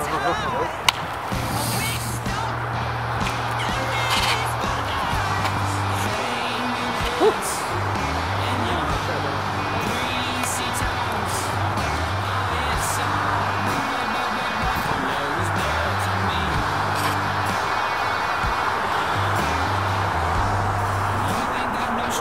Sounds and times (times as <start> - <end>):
Music: 0.0 - 22.2.